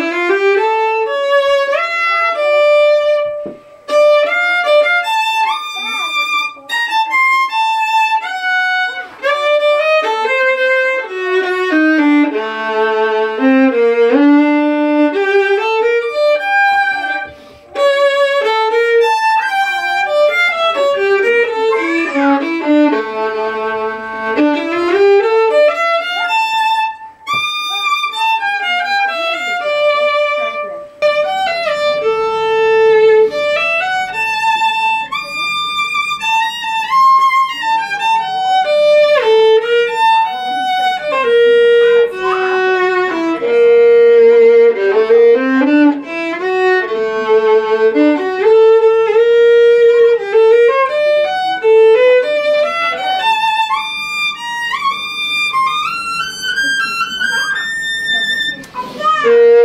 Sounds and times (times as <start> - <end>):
Inside, small room: 0.0 - 59.6
Violin, fiddle: 0.0 - 59.6.